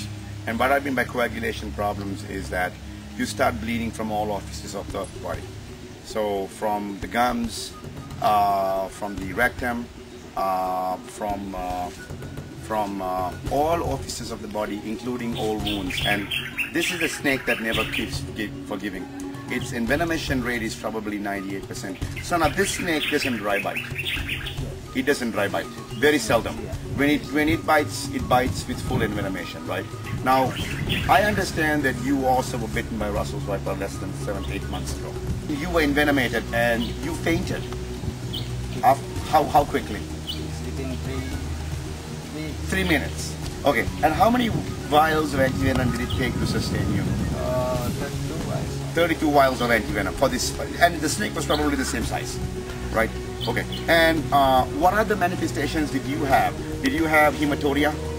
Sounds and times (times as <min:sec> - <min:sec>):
Speech: 0:00.0 - 0:05.5, 0:06.1 - 0:12.0, 0:12.6 - 0:23.9, 0:25.0 - 0:37.7, 0:38.8 - 0:41.4, 0:42.3 - 0:52.4, 0:53.0 - 0:58.0
Outside, rural or natural: 0:00.0 - 0:58.1.